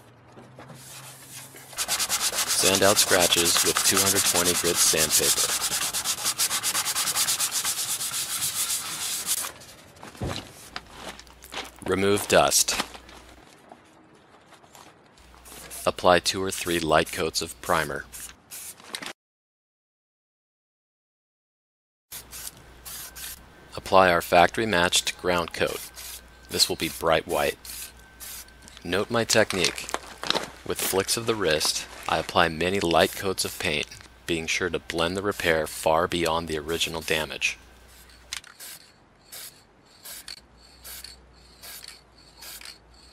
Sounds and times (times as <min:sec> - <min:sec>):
Speech: 0:02.6 - 0:05.5, 0:11.8 - 0:12.8, 0:15.8 - 0:18.1, 0:23.8 - 0:25.8, 0:26.5 - 0:27.6, 0:28.8 - 0:29.9, 0:30.7 - 0:37.6.